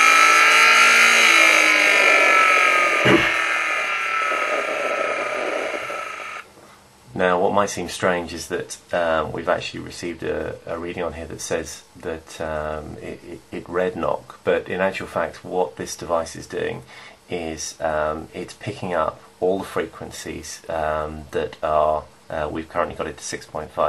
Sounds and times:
Engine: 0.0s - 6.4s
Speech: 7.1s - 23.8s.

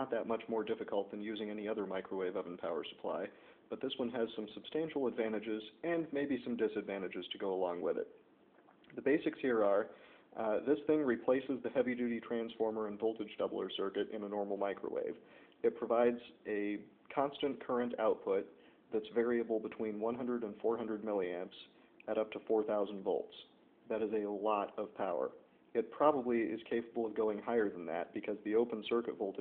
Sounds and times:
Speech: 0.0s - 8.2s, 8.9s - 29.4s.

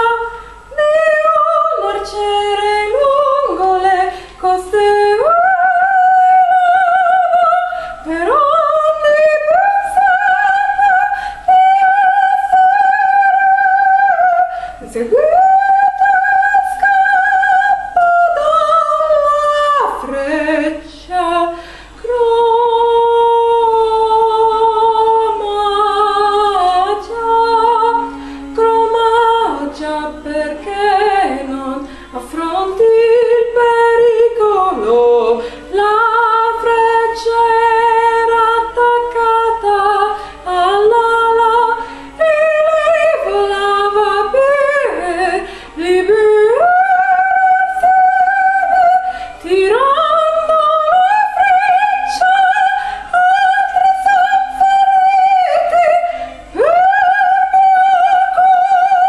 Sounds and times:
Female singing: 0.0s - 59.0s.

